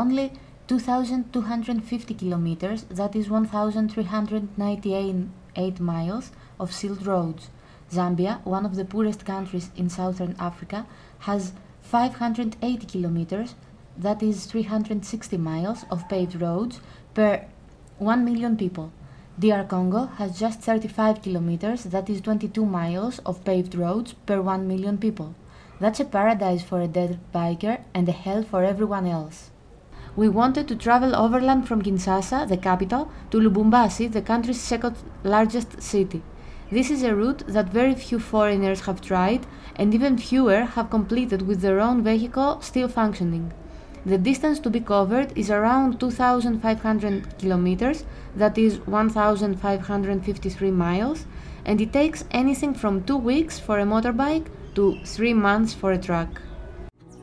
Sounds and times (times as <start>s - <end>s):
Speech: 0.0s - 29.6s, 30.2s - 56.5s.